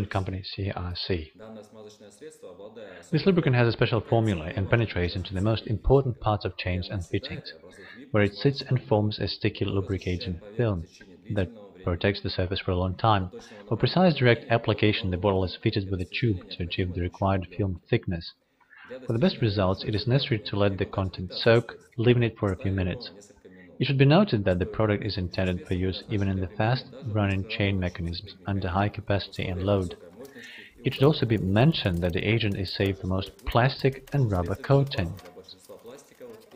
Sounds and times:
Speech: 0.0 - 36.5.

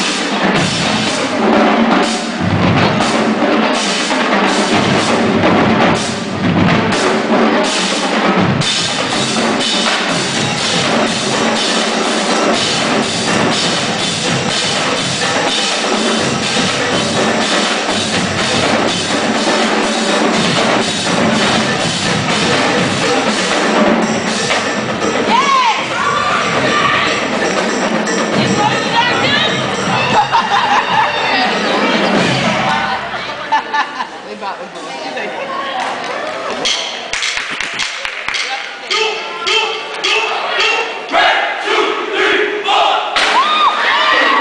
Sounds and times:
Music: 0.0 - 33.6.

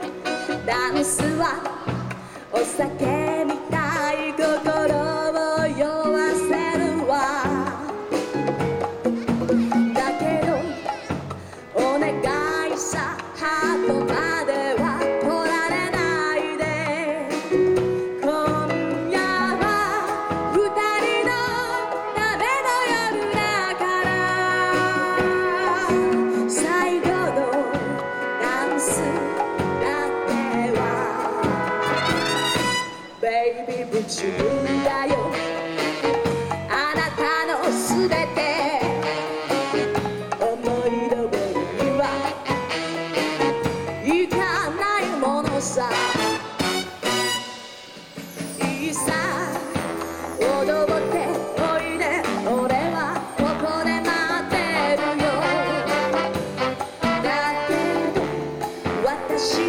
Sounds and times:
Orchestra: 0.0 - 59.6.

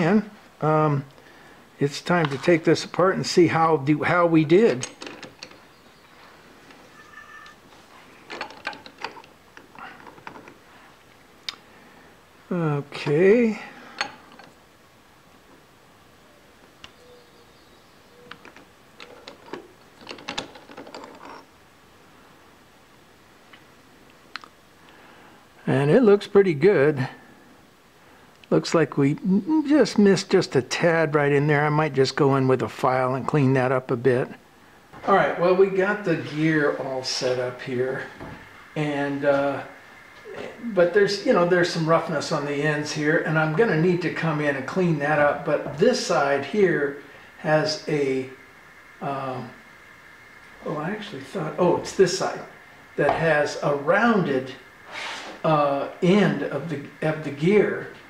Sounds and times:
Speech: 0.0 - 1.1, 1.8 - 4.9, 12.5 - 13.8, 25.6 - 27.2, 28.5 - 34.4, 35.0 - 38.2, 38.8 - 48.4, 49.0 - 49.6, 50.6 - 54.6, 55.4 - 58.0.

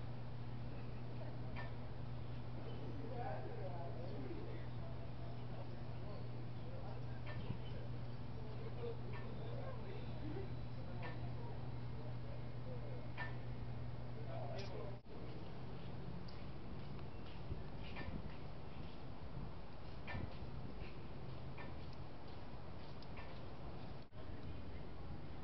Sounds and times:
Speech: 2.6 - 13.4, 14.0 - 15.4.

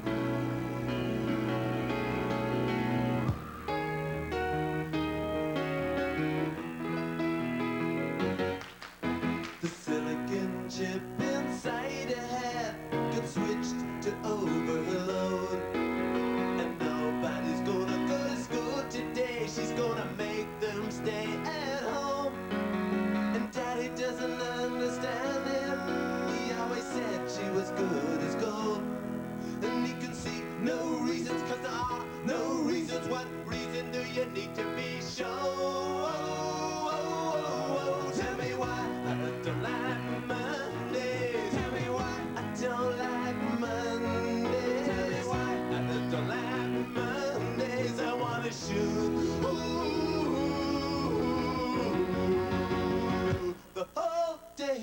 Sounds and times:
Music: 0.0 - 54.8.

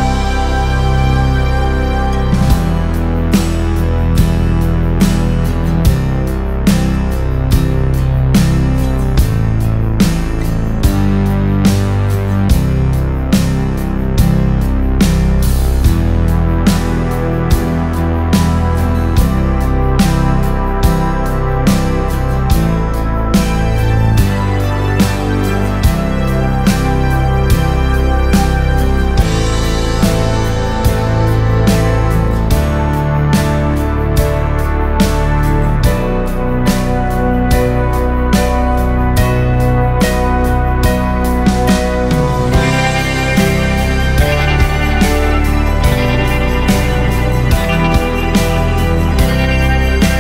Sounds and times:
Music: 0.0 - 50.2.

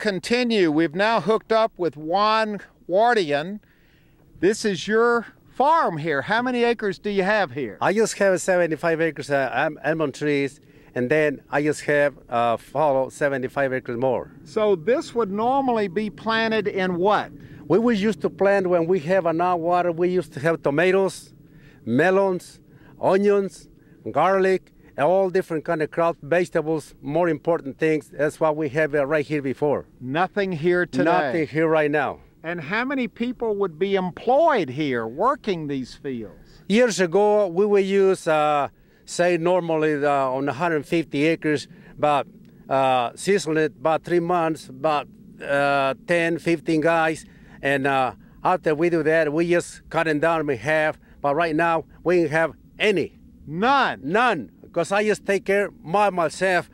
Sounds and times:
Speech: 0.0 - 3.6, 4.4 - 56.7.

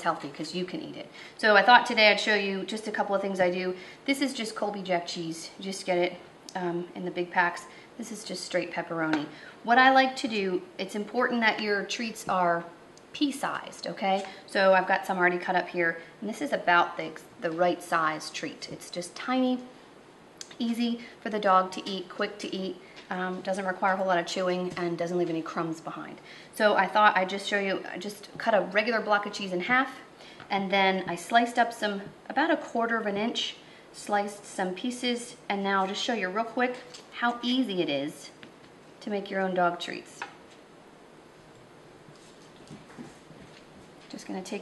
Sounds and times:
Speech: 0.0 - 19.8, 20.4 - 38.4, 39.0 - 40.4, 44.1 - 44.6.

